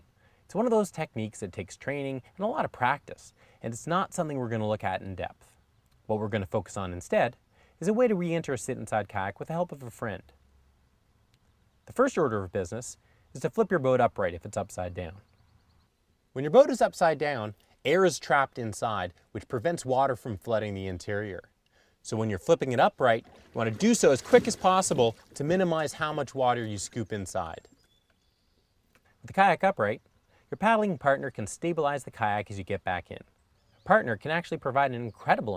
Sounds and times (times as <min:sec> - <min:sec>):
Speech: 0:00.5 - 0:10.4, 0:11.9 - 0:15.2, 0:16.4 - 0:27.7, 0:29.2 - 0:33.3, 0:33.9 - 0:35.5.